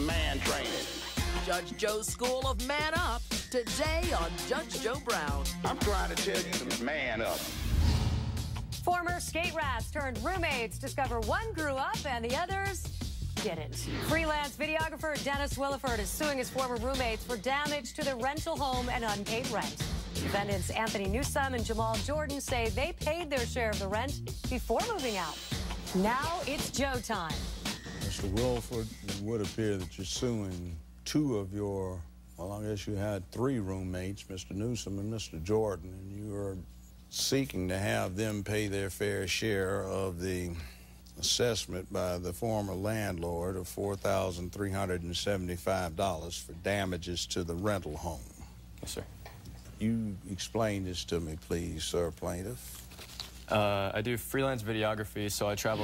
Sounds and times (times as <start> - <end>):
Music: 0.0 - 30.8, 55.4 - 55.8.